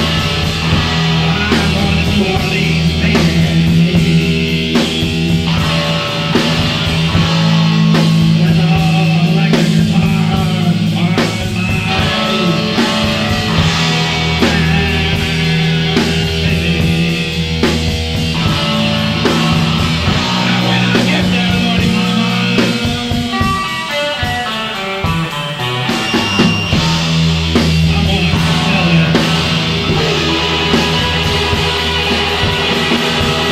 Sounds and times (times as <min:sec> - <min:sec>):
Psychedelic rock: 0:00.0 - 0:33.5.